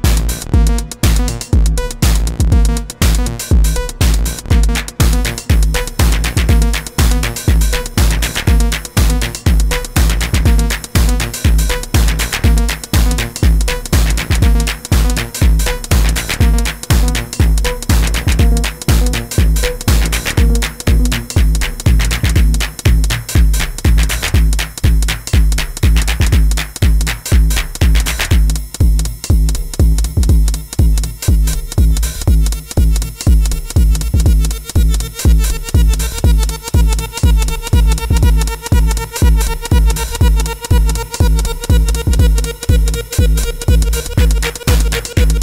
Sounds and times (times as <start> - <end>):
Drum machine: 0.0 - 45.4
Synthesizer: 0.0 - 45.4.